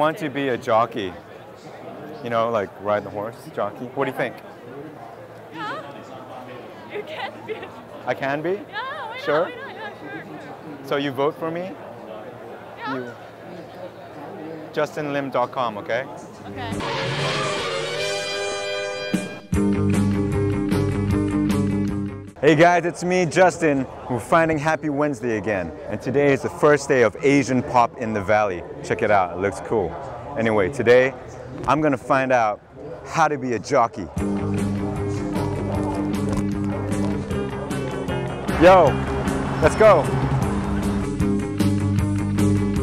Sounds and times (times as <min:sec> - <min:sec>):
Music: 0:16.5 - 0:22.4, 0:34.2 - 0:42.8.